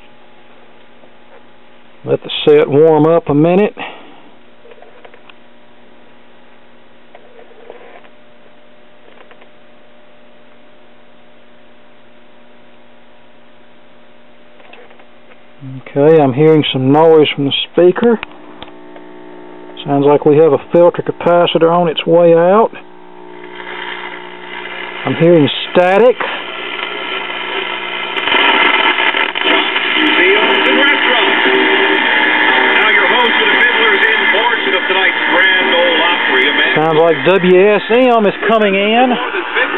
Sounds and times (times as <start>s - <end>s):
Speech: 2.0s - 3.8s, 15.6s - 18.2s, 19.8s - 22.8s, 25.0s - 26.4s, 30.0s - 31.7s, 32.7s - 39.7s
Radio: 14.6s - 39.7s.